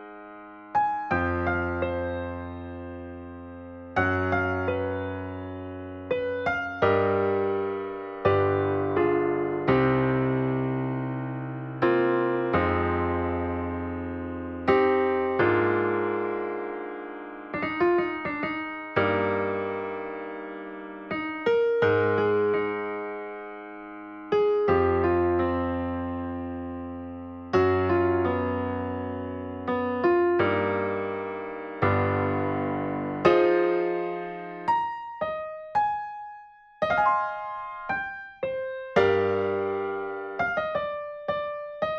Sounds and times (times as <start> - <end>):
Music: 0.0 - 41.9.